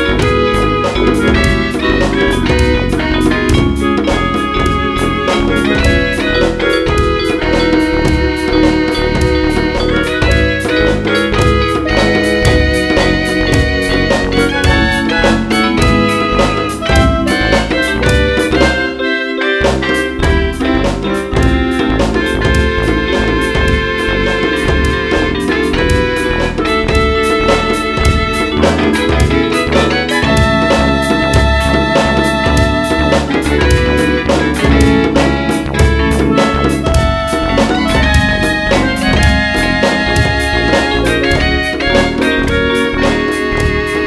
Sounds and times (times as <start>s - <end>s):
Soundtrack music: 0.0s - 44.0s.